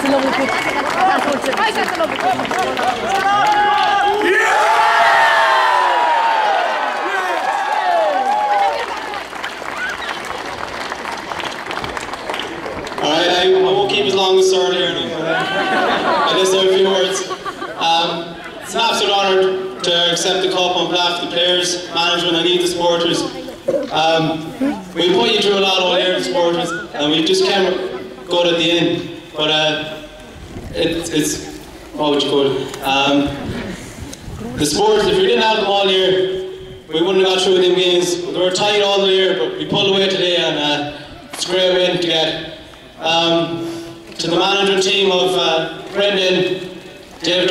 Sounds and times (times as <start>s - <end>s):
Male speech, man speaking: 13.0s - 15.6s, 16.2s - 30.0s, 30.7s - 33.4s, 34.5s - 43.6s, 44.2s - 46.6s, 47.2s - 47.5s.